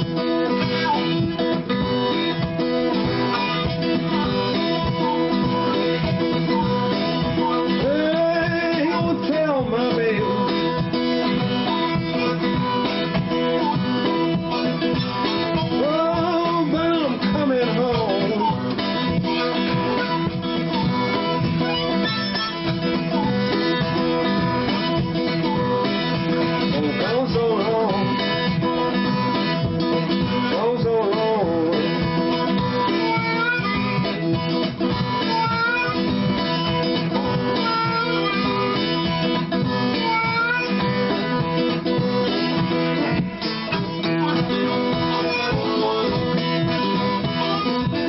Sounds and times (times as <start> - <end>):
Music: 0.0 - 48.0.